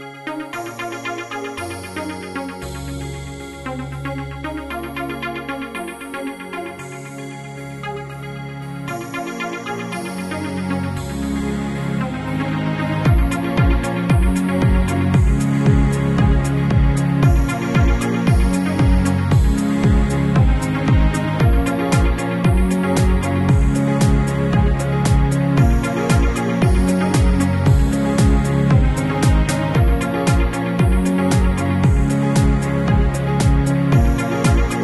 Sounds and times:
Music: 0:00.0 - 0:34.8.

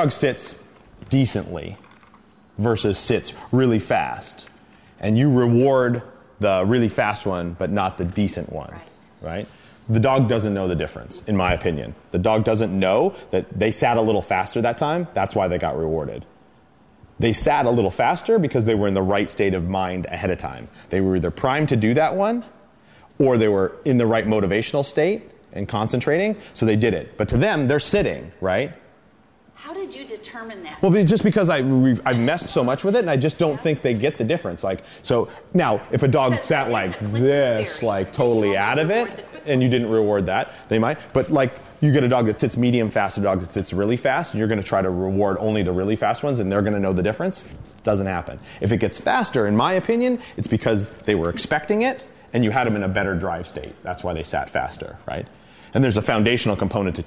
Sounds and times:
Speech: 0:02.6 - 0:16.3, 0:29.8 - 0:57.0.

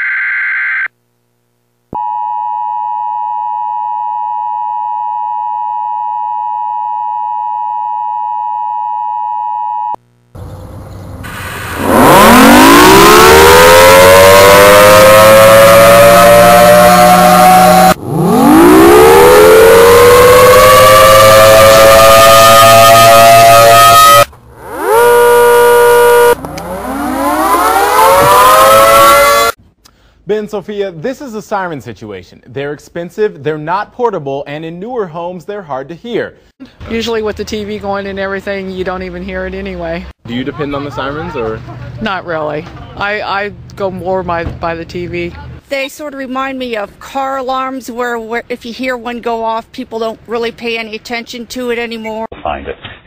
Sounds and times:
Civil defense siren: 0:11.8 - 0:29.6.

